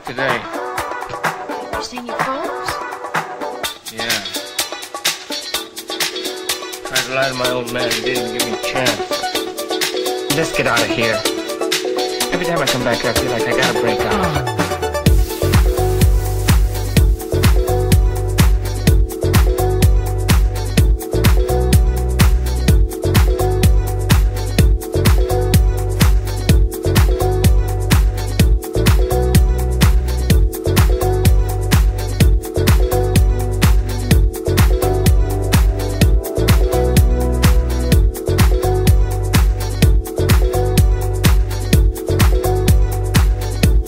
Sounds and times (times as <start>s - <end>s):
Exciting music: 0.0s - 43.8s.